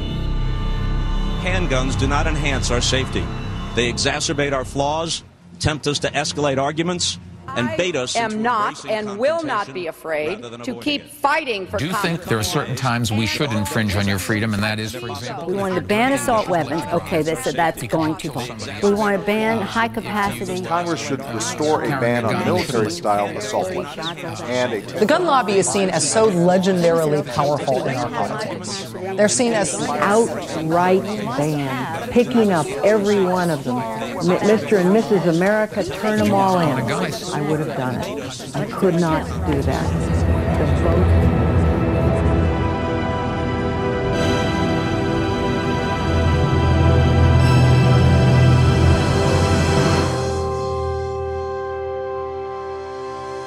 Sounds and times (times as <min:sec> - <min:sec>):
Speech: 0:03.8 - 0:41.3.